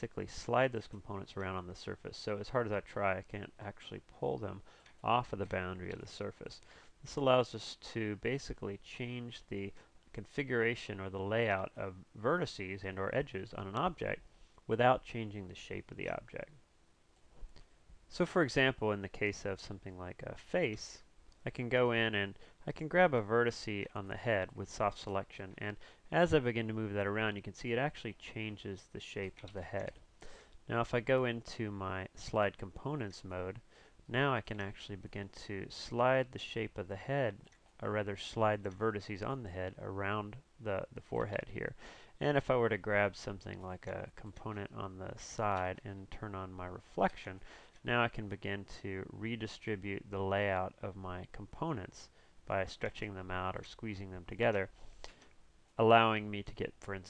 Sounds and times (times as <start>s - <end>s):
Speech: 0.0s - 16.6s, 18.1s - 30.1s, 30.7s - 54.8s, 55.8s - 57.1s.